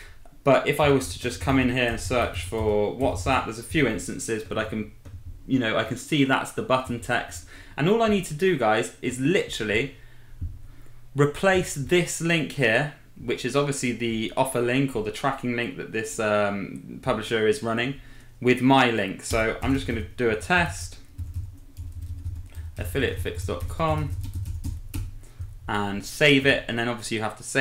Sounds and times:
Speech: 0:00.4 - 0:04.9, 0:05.5 - 0:10.0, 0:11.2 - 0:21.0, 0:22.8 - 0:24.2, 0:25.7 - 0:27.6
Computer keyboard: 0:21.0 - 0:25.5.

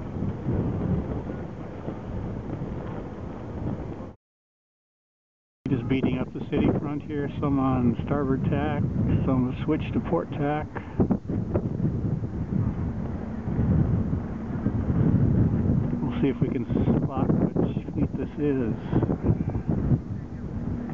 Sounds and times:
Sailboat, sailing ship: 0:00.0 - 0:04.2, 0:05.7 - 0:20.9
Wind noise (microphone): 0:00.0 - 0:04.2, 0:05.7 - 0:20.9.

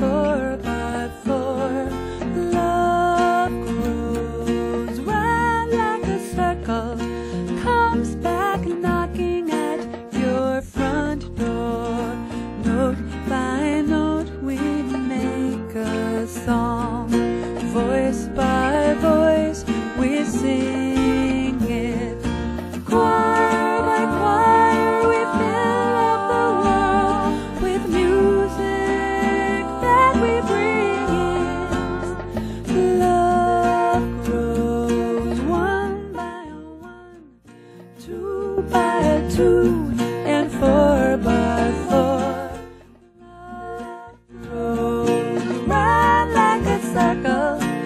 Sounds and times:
Music: 0:00.0 - 0:47.8.

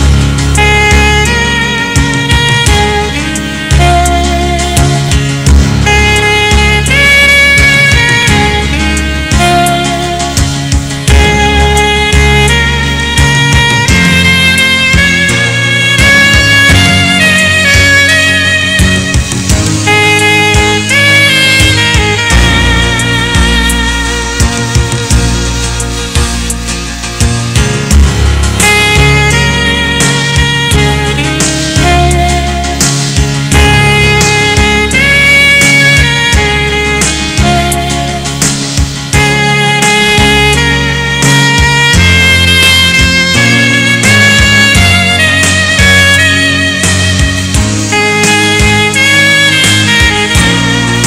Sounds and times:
Music: 0:00.0 - 0:51.0.

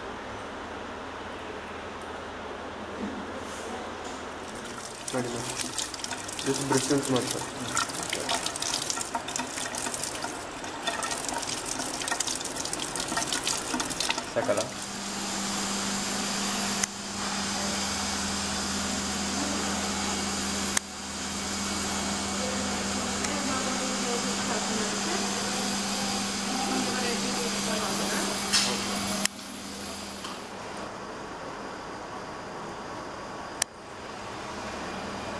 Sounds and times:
Speech: 0:05.1 - 0:05.6, 0:06.4 - 0:07.8, 0:14.4 - 0:14.8, 0:22.3 - 0:29.2.

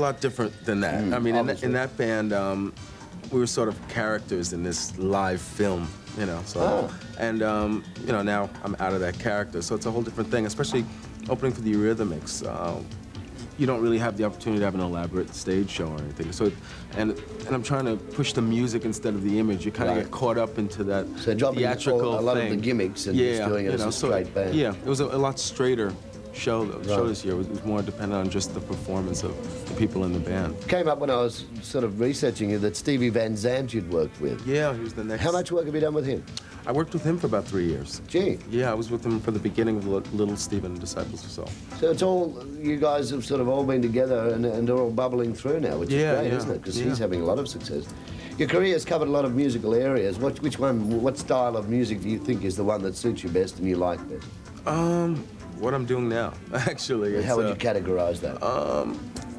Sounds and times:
Speech: 0:00.0 - 0:02.7, 0:03.3 - 0:12.9, 0:13.6 - 0:59.0
Music: 0:00.0 - 0:59.3.

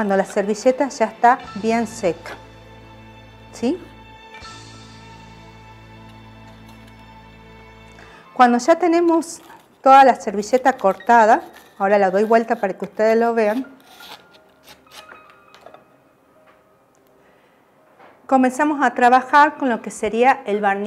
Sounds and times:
Music: 0:00.0 - 0:20.8
Speech: 0:18.3 - 0:20.8.

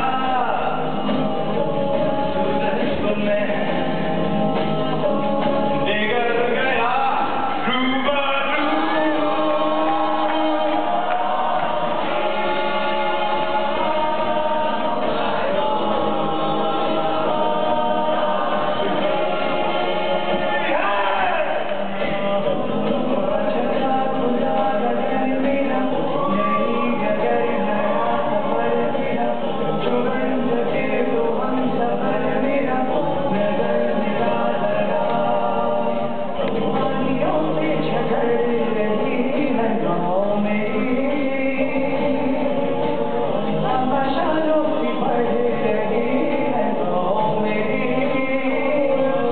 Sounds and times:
Choir: 0:00.0 - 0:49.3
Male singing: 0:00.0 - 0:49.3.

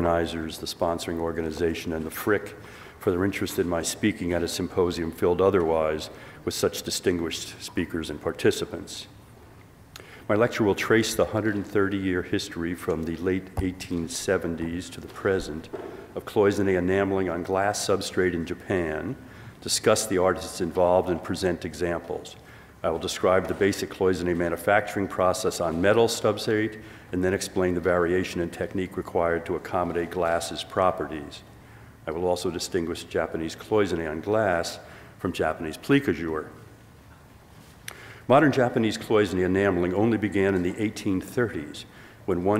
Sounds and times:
Speech: 0:00.0 - 0:09.2, 0:10.3 - 0:36.6, 0:38.3 - 0:42.5.

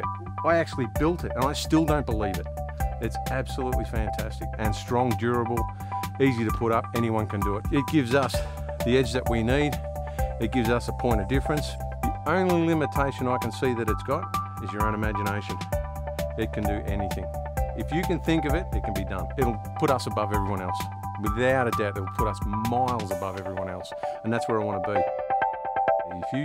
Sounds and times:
Speech: 0:00.0 - 0:02.4, 0:03.0 - 0:09.8, 0:10.4 - 0:15.7, 0:16.4 - 0:25.0, 0:26.1 - 0:26.4
Music: 0:00.0 - 0:26.4.

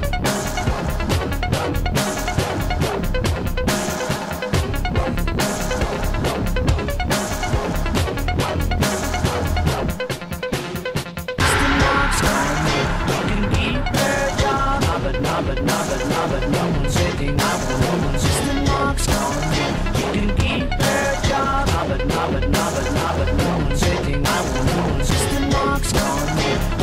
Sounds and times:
Dubstep: 0:00.0 - 0:26.8.

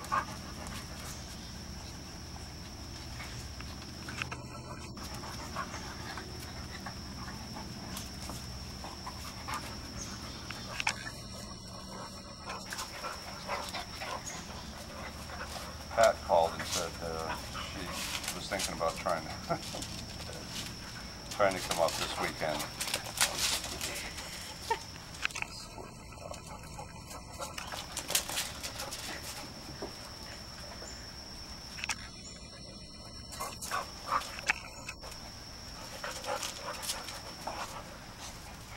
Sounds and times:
Outside, rural or natural: 0:00.0 - 0:38.7
Speech: 0:16.0 - 0:19.4, 0:21.4 - 0:22.7.

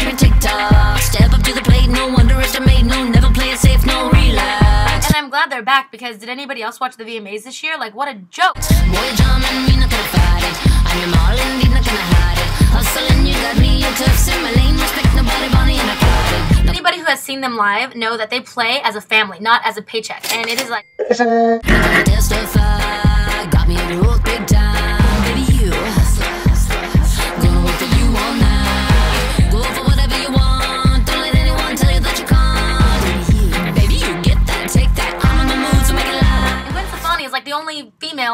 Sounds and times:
Music: 0:00.0 - 0:05.2, 0:08.6 - 0:16.8, 0:21.6 - 0:37.2
Speech: 0:05.2 - 0:08.6, 0:16.8 - 0:22.1, 0:37.0 - 0:38.3.

